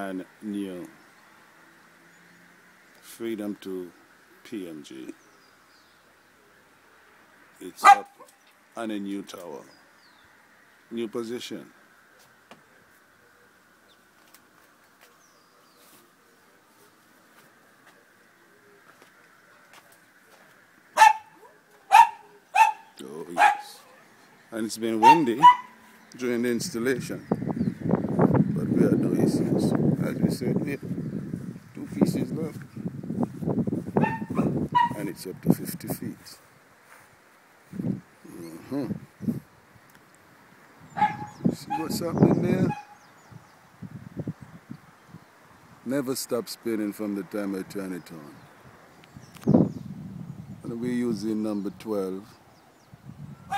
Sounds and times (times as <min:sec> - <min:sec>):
Speech: 0:00.0 - 0:01.0, 0:03.0 - 0:05.2, 0:07.6 - 0:08.1, 0:08.8 - 0:09.7, 0:10.9 - 0:11.8, 0:23.0 - 0:25.5, 0:26.2 - 0:27.3, 0:28.6 - 0:30.8, 0:31.8 - 0:32.6, 0:34.9 - 0:36.4, 0:38.2 - 0:39.0, 0:41.5 - 0:42.8, 0:45.9 - 0:48.4, 0:50.6 - 0:52.4.